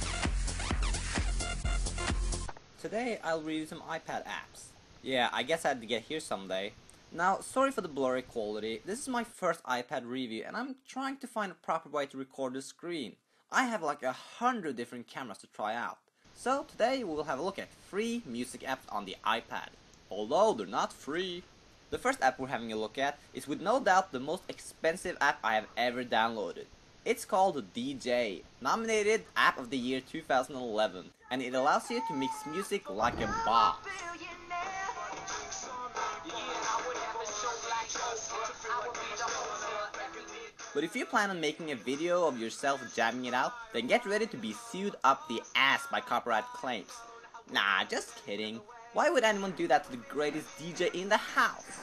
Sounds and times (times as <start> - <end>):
Speech: 2.8 - 33.9, 40.8 - 51.8.